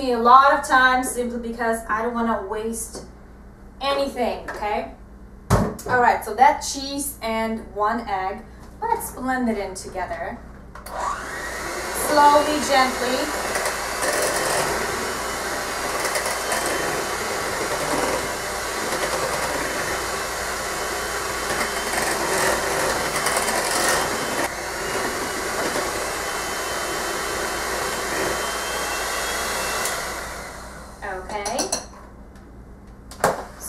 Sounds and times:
Blender: 10.9s - 31.1s.

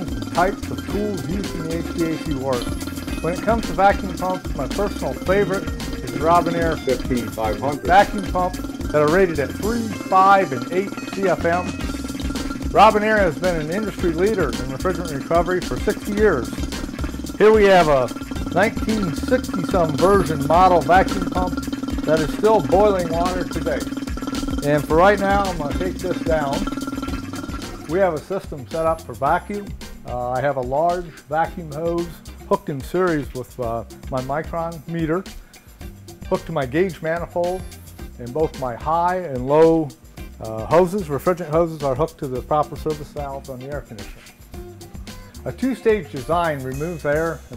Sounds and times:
Speech: 0.0s - 11.7s, 12.8s - 16.5s, 17.4s - 23.8s, 24.6s - 26.6s, 27.9s - 35.3s, 36.3s - 44.2s, 45.5s - 47.5s
Music: 0.0s - 47.5s.

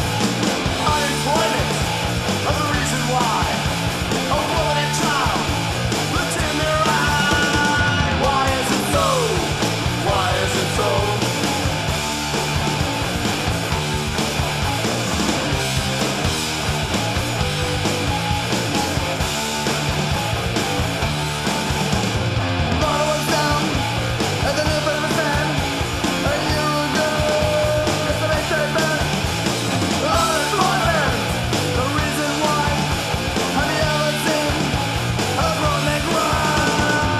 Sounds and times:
Punk rock: 0.0s - 37.1s.

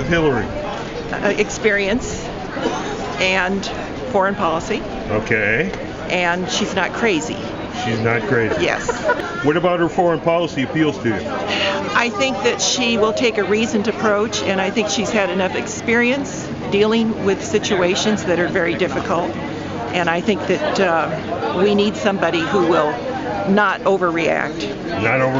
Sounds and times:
Speech: 3.2s - 8.8s, 23.6s - 25.3s.

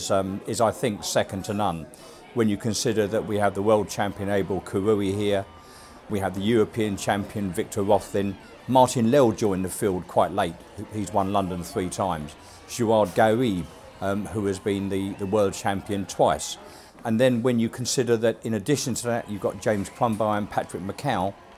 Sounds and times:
Speech: 0.0s - 5.5s, 6.1s - 21.4s
Outside, urban or manmade: 0.0s - 21.5s.

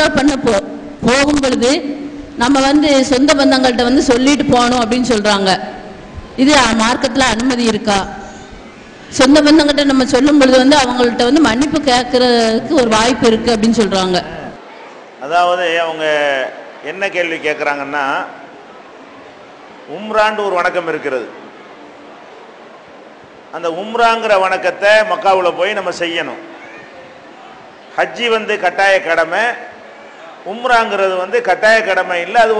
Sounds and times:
Female speech, woman speaking: 0.0s - 5.7s, 6.4s - 8.2s, 9.1s - 14.4s
Narration, monologue: 0.0s - 14.6s, 23.4s - 26.6s, 27.9s - 32.5s.

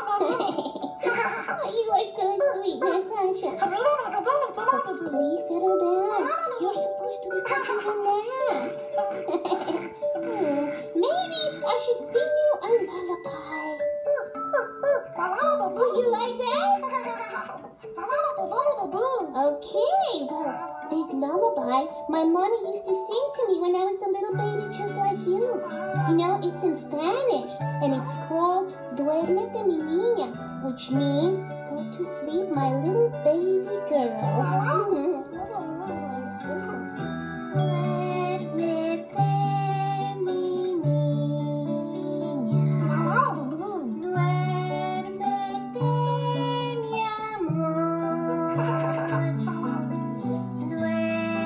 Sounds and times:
Background music: 0.0s - 51.4s
Speech: 1.6s - 8.7s, 11.0s - 14.2s, 15.2s - 36.9s, 42.8s - 44.4s.

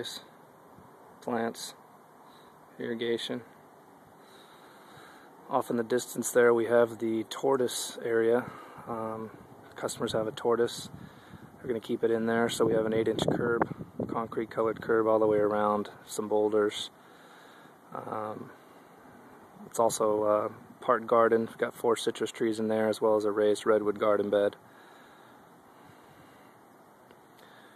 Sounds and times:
Speech: 0.0s - 0.3s, 1.2s - 1.8s, 2.8s - 3.5s, 5.5s - 10.9s, 11.6s - 17.0s, 17.9s - 18.6s, 19.6s - 24.6s.

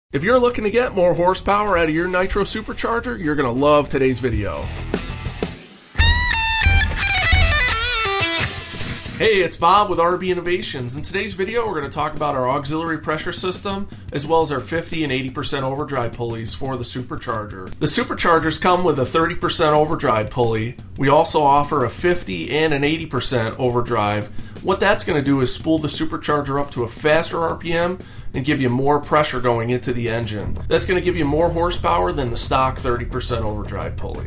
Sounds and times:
Speech: 0.1s - 4.8s, 9.2s - 34.2s
Music: 0.1s - 34.2s.

